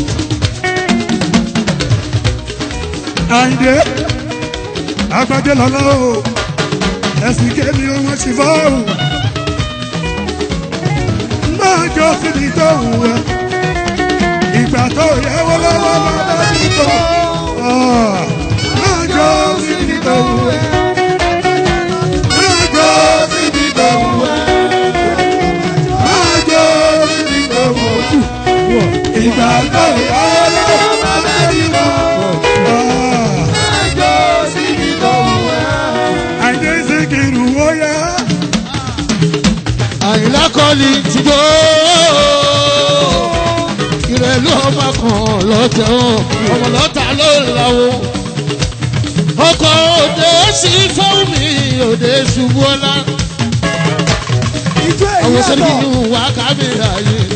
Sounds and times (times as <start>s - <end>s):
Middle Eastern music: 0.0s - 57.3s
Music of Africa: 0.0s - 57.3s.